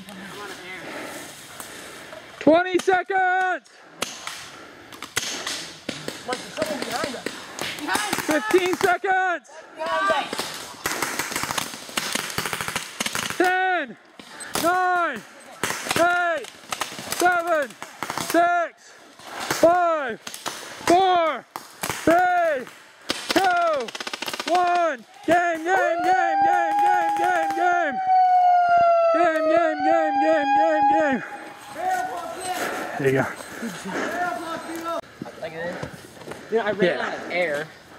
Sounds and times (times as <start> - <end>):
Outside, rural or natural: 0.0 - 37.9
Siren: 25.7 - 32.2.